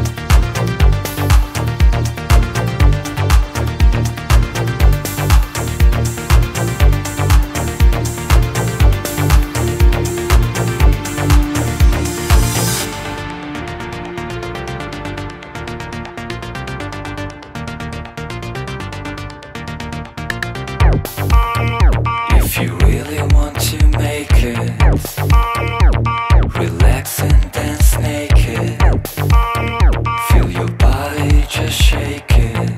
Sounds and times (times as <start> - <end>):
Music: 0.0 - 32.7.